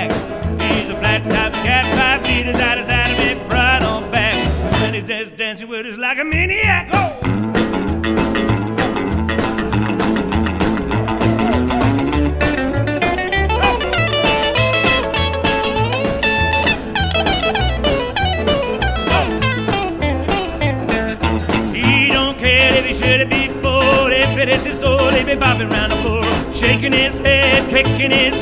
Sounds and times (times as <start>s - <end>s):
Music: 0.0s - 5.4s, 6.3s - 28.4s.